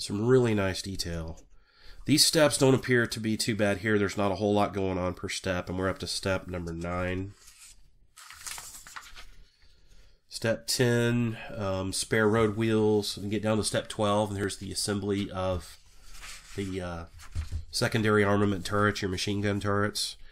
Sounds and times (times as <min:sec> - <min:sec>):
Speech: 0:00.0 - 0:01.4, 0:02.1 - 0:07.4, 0:10.3 - 0:15.8, 0:16.6 - 0:20.2
Inside, small room: 0:00.0 - 0:20.3.